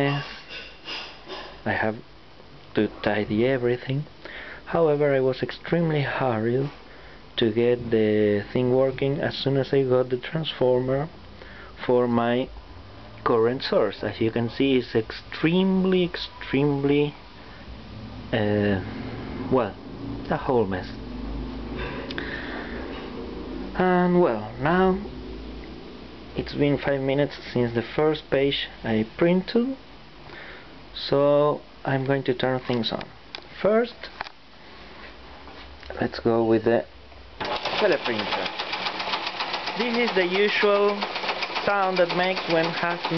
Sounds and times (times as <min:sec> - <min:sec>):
Speech: 0:00.0 - 0:00.4, 0:01.6 - 0:02.0, 0:02.7 - 0:04.1, 0:04.7 - 0:06.8, 0:07.4 - 0:11.2, 0:11.8 - 0:12.5, 0:13.2 - 0:17.2, 0:18.3 - 0:18.9, 0:19.5 - 0:21.0, 0:23.8 - 0:25.1, 0:26.4 - 0:29.8, 0:31.0 - 0:34.2, 0:35.9 - 0:36.9, 0:37.8 - 0:38.5, 0:39.8 - 0:43.1.